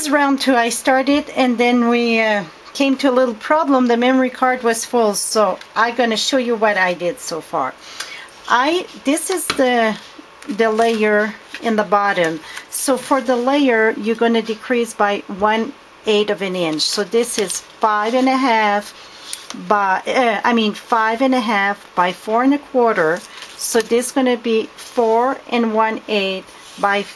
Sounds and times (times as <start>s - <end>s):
Speech: 0.0s - 7.8s, 8.5s - 18.9s, 19.6s - 27.1s.